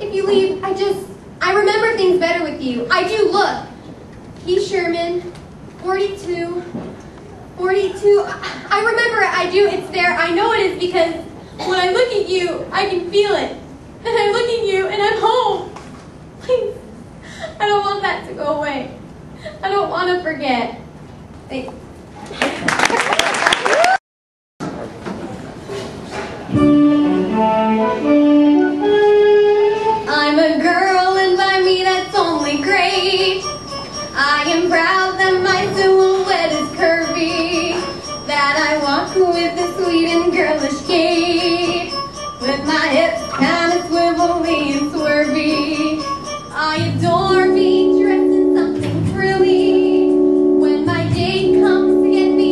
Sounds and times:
Music: 26.5 - 52.5.

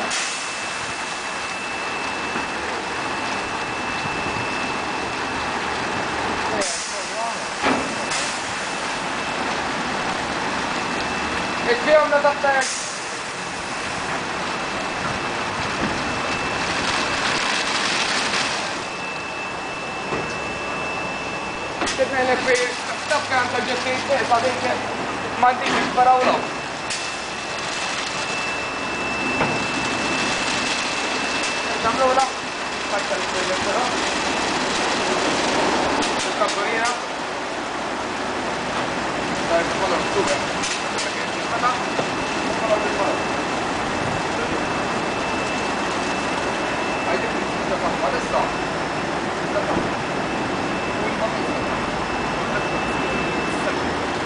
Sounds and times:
Speech: 6.5 - 7.5, 11.6 - 12.8, 21.9 - 26.5, 31.7 - 34.0, 36.4 - 37.1, 39.5 - 41.9, 42.6 - 43.2, 47.1 - 48.6, 49.5 - 49.9, 51.0 - 51.7.

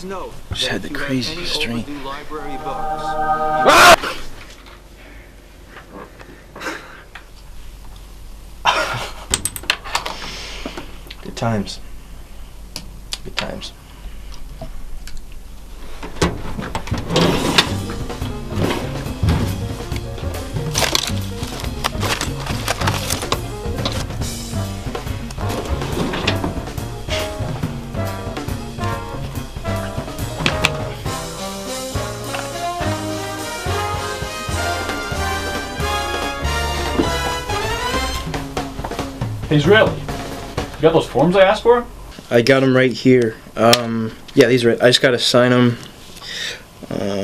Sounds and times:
Speech: 0.0 - 2.9, 11.2 - 11.8, 13.2 - 13.8, 39.5 - 40.0, 40.8 - 45.8, 46.9 - 47.2.

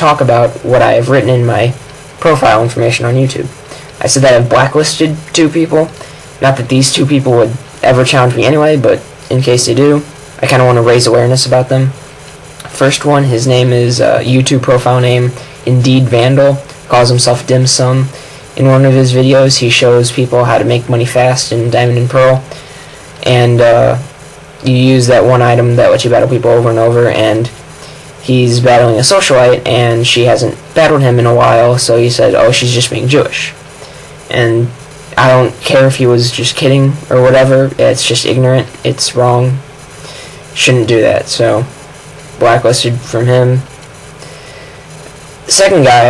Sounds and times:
Speech: 0.0 - 22.6, 23.2 - 27.6, 28.2 - 33.7, 34.3 - 39.7, 40.6 - 43.8, 45.5 - 46.1.

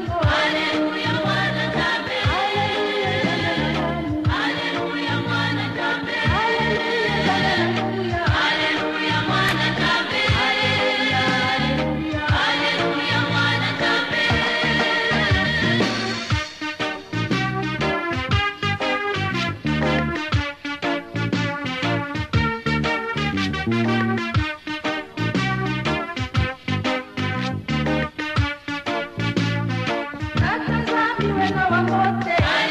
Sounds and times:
Gospel music: 0.0 - 32.7.

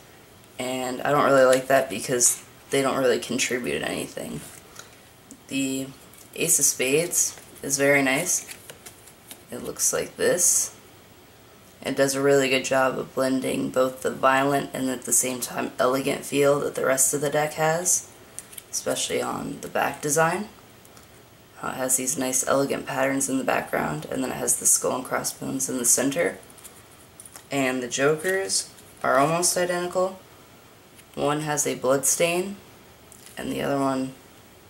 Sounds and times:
Speech: 0.6 - 4.5, 5.5 - 8.5, 9.5 - 10.8, 11.8 - 18.1, 18.7 - 20.6, 21.6 - 26.4, 27.5 - 30.2, 31.1 - 32.6, 33.3 - 34.2.

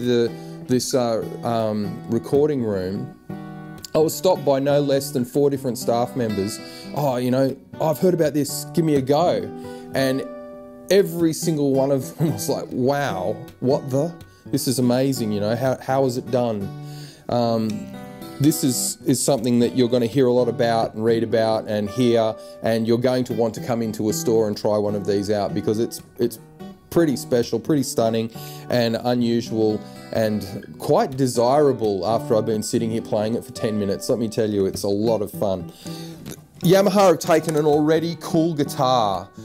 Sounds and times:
Speech: 0.0 - 3.1, 3.9 - 10.3, 10.9 - 16.7, 17.3 - 17.8, 18.4 - 35.7, 36.6 - 39.3
Acoustic guitar: 0.0 - 39.4.

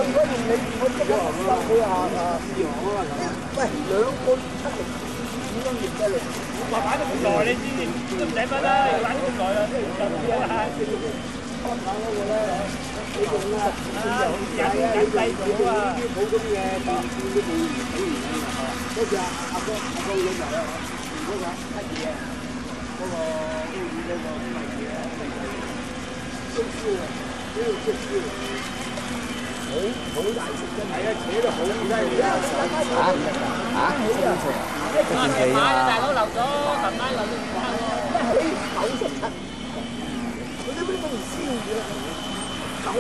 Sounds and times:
Speech: 0.0 - 28.8, 29.6 - 39.4, 40.6 - 42.2.

